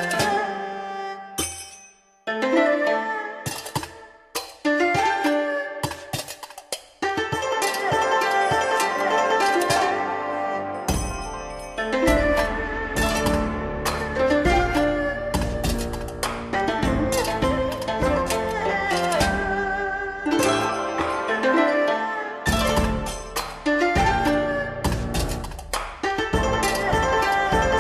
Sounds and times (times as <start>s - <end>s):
Folk music: 0.0s - 1.6s, 2.3s - 27.8s
Middle Eastern music: 0.0s - 27.8s
Soundtrack music: 7.6s - 27.8s.